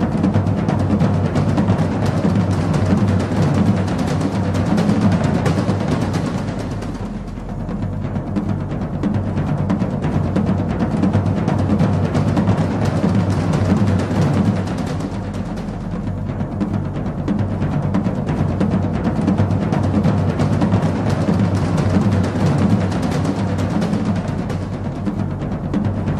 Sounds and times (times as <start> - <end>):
Music: 0.0 - 26.2.